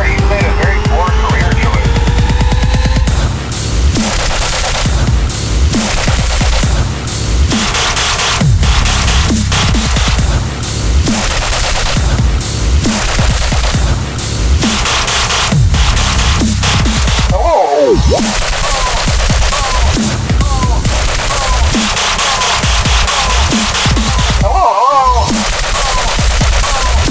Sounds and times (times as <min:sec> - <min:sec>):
Dubstep: 0:00.0 - 0:27.1.